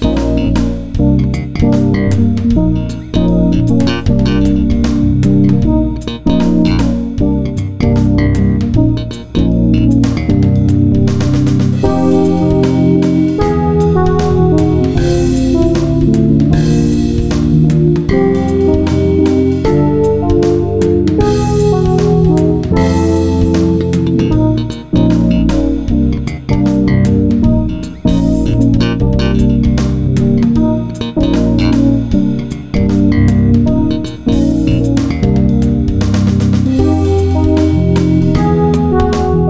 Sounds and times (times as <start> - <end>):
Jazz: 0.0 - 39.4.